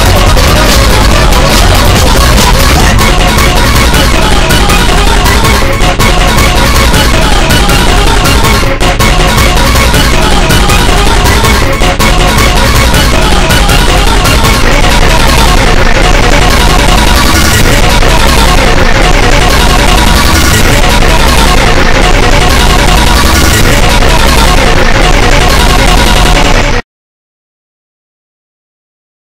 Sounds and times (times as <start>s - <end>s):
Music: 0.0s - 26.8s.